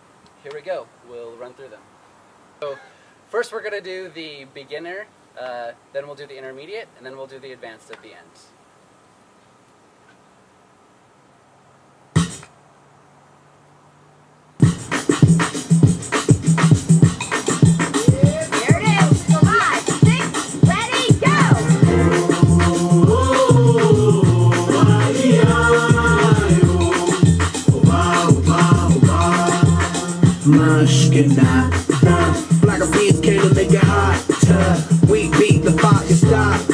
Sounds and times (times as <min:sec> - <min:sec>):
Speech: 0:00.4 - 0:01.8, 0:02.6 - 0:08.6, 0:18.1 - 0:21.6
Outside, urban or manmade: 0:07.8 - 0:36.7
Music: 0:12.2 - 0:12.5, 0:14.6 - 0:36.7.